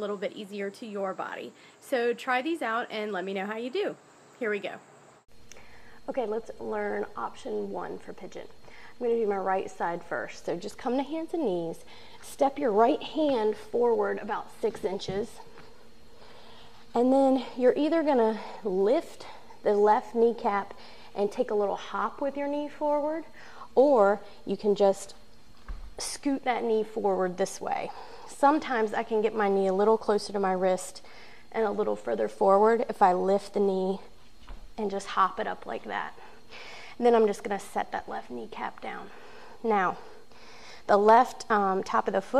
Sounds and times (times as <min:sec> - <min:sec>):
Speech: 0:00.0 - 0:04.8, 0:06.1 - 0:15.4, 0:17.0 - 0:25.2, 0:26.0 - 0:34.1, 0:34.8 - 0:36.2, 0:37.0 - 0:40.1, 0:40.9 - 0:42.4.